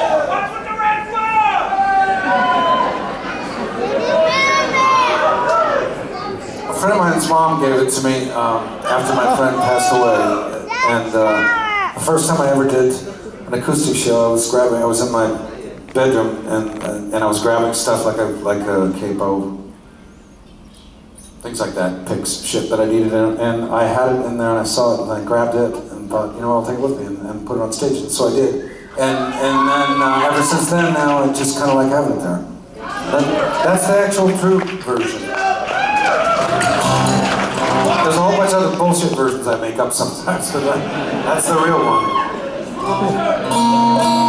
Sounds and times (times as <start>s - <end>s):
Male speech, man speaking: 0.3s - 1.6s, 6.7s - 19.7s, 21.4s - 32.5s, 33.1s - 35.4s, 37.8s - 42.2s
Applause: 33.1s - 38.8s.